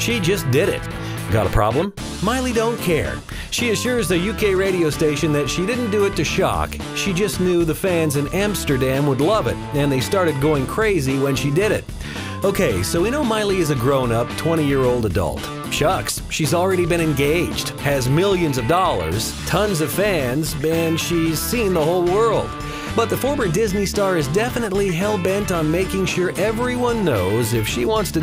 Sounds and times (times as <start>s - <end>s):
Speech: 0.0s - 11.8s, 12.4s - 28.2s
Music: 0.0s - 28.2s.